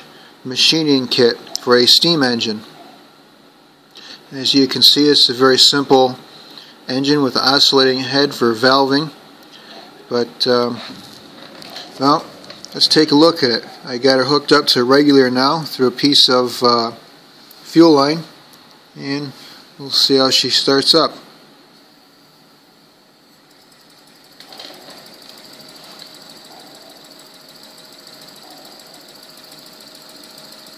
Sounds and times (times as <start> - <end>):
Speech: 0.4 - 2.7, 4.3 - 6.2, 6.9 - 9.2, 10.1 - 11.0, 12.0 - 17.0, 17.6 - 18.4, 19.0 - 21.3.